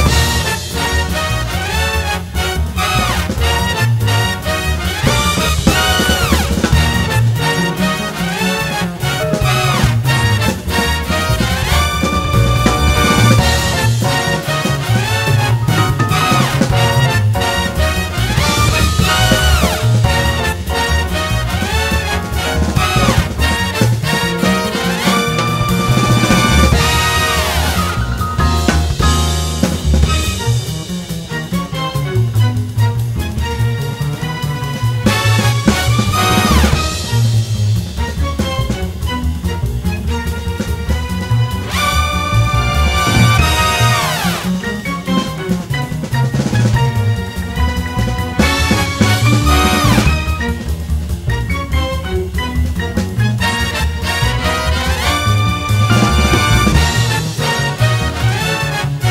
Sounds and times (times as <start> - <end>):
Theme music: 0.0 - 59.1.